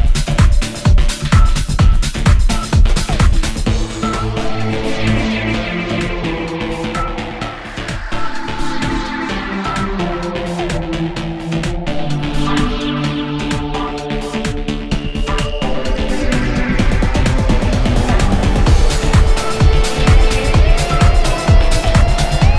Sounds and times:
Music: 0.0s - 22.5s.

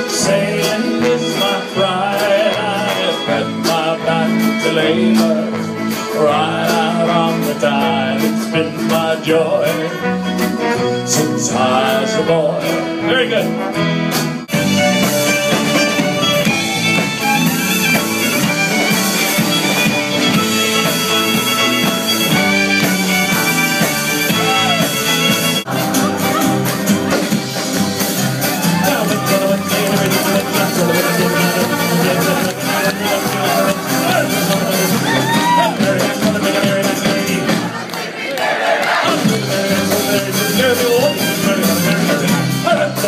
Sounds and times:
Singing: 0.0s - 10.1s, 28.6s - 43.0s
Inside, large room or hall: 0.0s - 43.0s
Music: 0.0s - 43.0s.

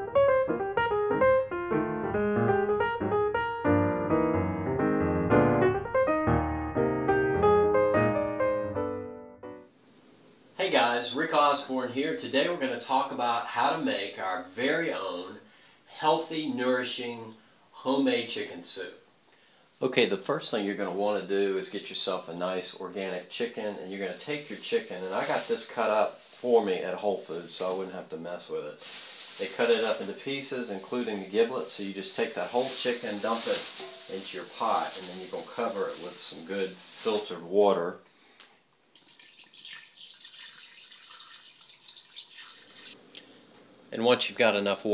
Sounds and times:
Speech: 10.6s - 19.0s, 19.8s - 28.8s, 29.4s - 38.0s, 43.9s - 44.9s.

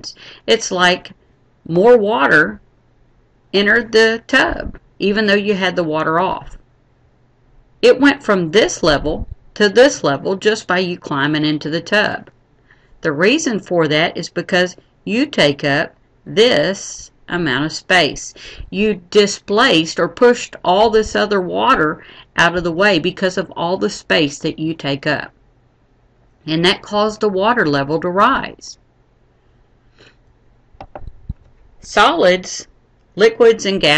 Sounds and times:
Speech: 0.0s - 1.1s, 1.7s - 2.6s, 3.6s - 6.6s, 7.8s - 12.3s, 13.0s - 25.3s, 26.5s - 28.8s, 31.8s - 33.9s.

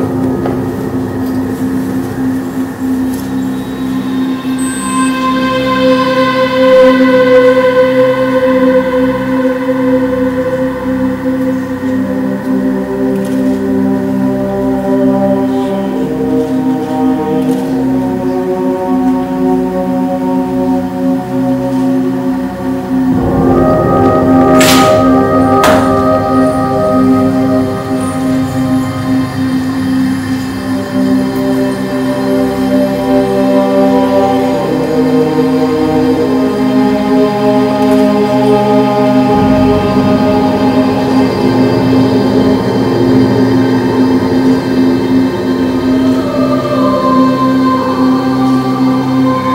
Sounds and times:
Music: 0.0s - 49.5s.

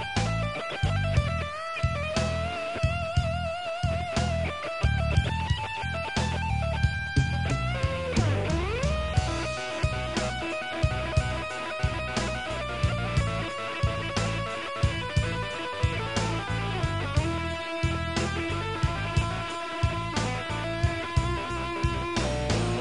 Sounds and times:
Guitar: 0.0s - 22.8s.

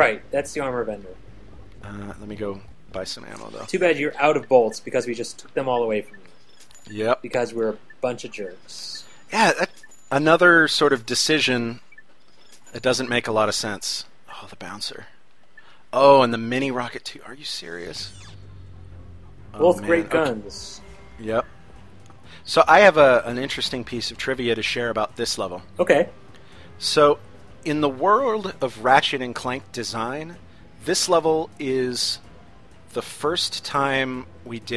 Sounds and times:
Speech: 0.0s - 1.2s, 1.8s - 6.1s, 6.9s - 11.8s, 12.8s - 15.1s, 16.0s - 18.1s, 19.6s - 21.4s, 22.5s - 26.1s, 26.8s - 32.2s, 32.9s - 34.7s
Music: 16.9s - 34.7s.

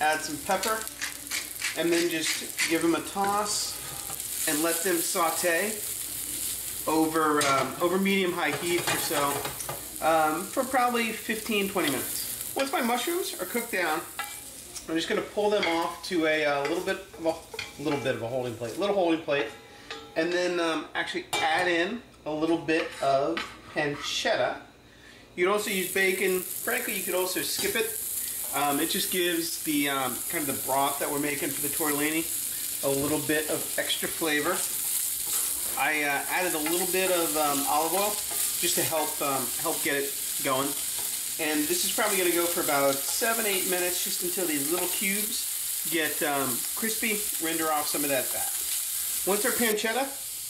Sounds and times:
Sizzle: 0.0s - 20.1s, 24.4s - 50.5s.

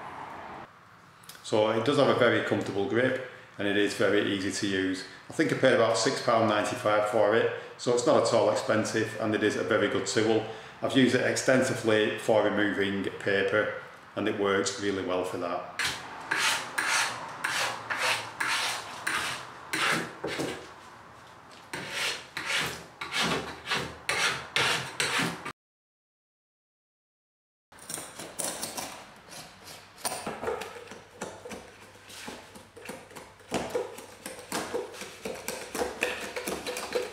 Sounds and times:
Tools: 27.8s - 31.7s.

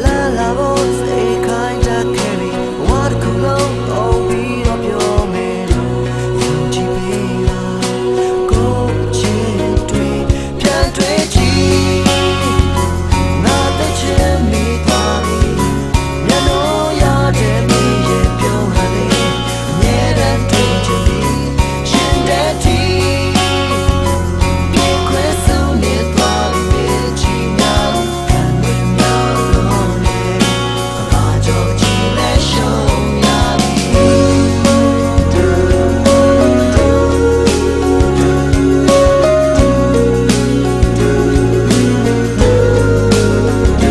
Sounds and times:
Music: 0.0s - 43.9s.

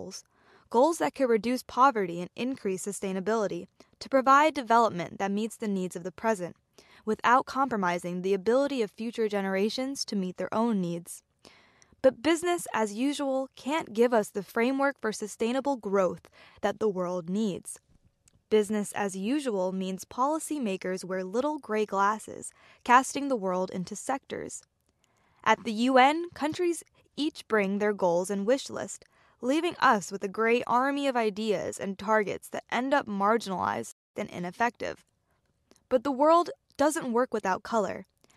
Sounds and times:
Speech: 0.0s - 11.2s, 12.0s - 17.8s, 18.5s - 24.6s, 25.4s - 35.0s, 35.9s - 38.0s.

